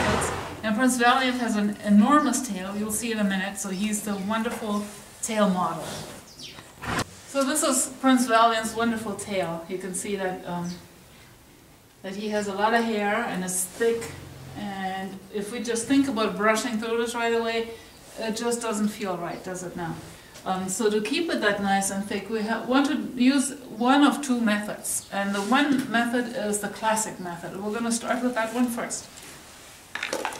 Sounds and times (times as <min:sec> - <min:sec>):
Speech: 0:00.6 - 0:06.1, 0:07.3 - 0:10.9, 0:12.0 - 0:29.1.